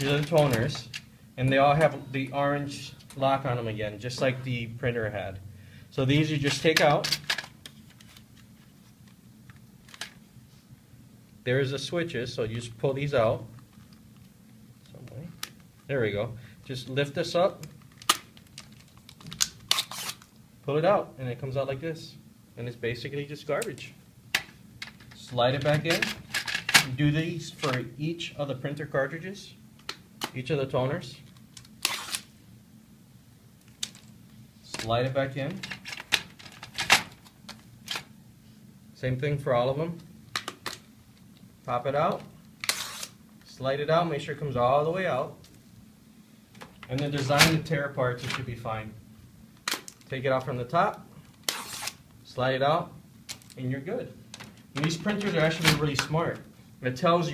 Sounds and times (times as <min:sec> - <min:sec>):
Speech: 0:00.0 - 0:05.4, 0:06.0 - 0:07.2, 0:11.4 - 0:13.5, 0:14.9 - 0:17.7, 0:20.7 - 0:24.0, 0:25.2 - 0:26.2, 0:26.8 - 0:29.6, 0:30.3 - 0:31.3, 0:34.6 - 0:35.6, 0:39.0 - 0:40.1, 0:41.7 - 0:42.3, 0:43.5 - 0:45.4, 0:46.9 - 0:49.0, 0:50.1 - 0:51.1, 0:52.2 - 0:53.0, 0:53.6 - 0:54.2, 0:54.8 - 0:57.3.